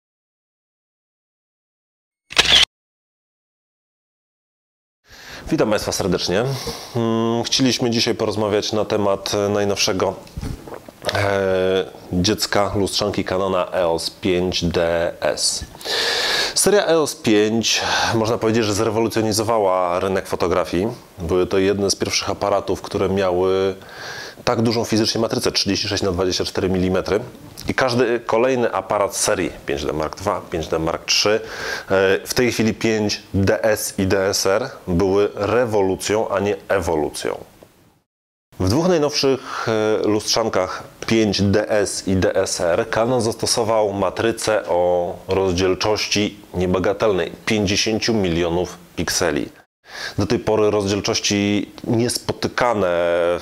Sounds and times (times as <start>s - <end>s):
Single-lens reflex camera: 2.3s - 2.7s
Speech: 5.5s - 10.3s, 11.0s - 15.7s, 16.6s - 23.8s, 24.4s - 37.5s, 38.6s - 49.6s, 50.2s - 53.4s.